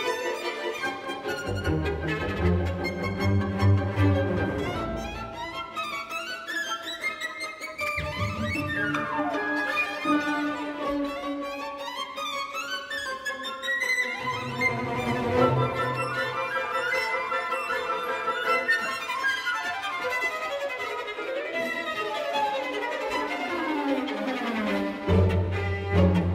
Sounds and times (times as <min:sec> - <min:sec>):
Music: 0:00.0 - 0:26.3.